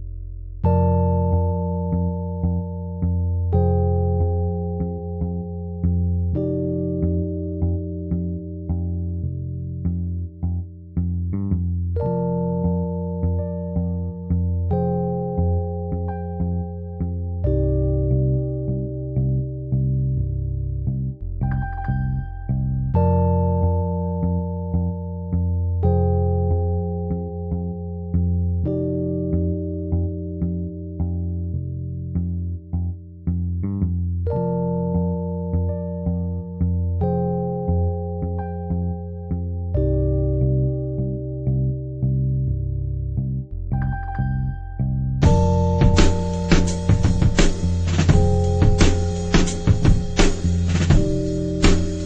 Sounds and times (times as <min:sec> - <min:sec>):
Music: 0:00.0 - 0:52.0.